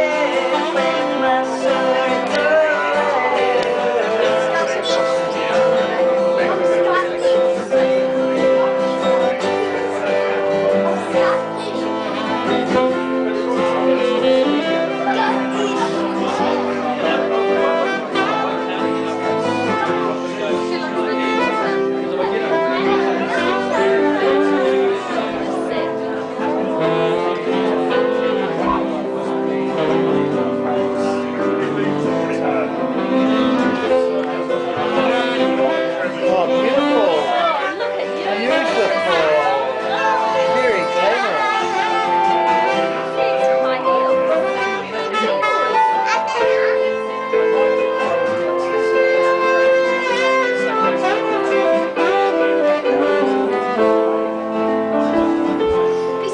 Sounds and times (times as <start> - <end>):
Speech: 0.0 - 54.2, 55.0 - 56.3
Musical instrument: 0.0 - 56.3.